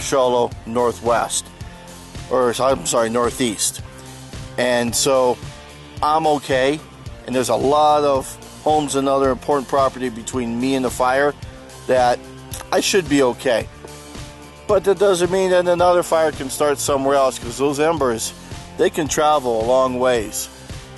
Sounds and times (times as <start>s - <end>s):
Speech: 0.0s - 1.4s, 2.3s - 3.8s, 4.6s - 5.4s, 6.0s - 11.3s, 11.9s - 13.7s, 14.7s - 20.5s
Music: 0.0s - 20.9s.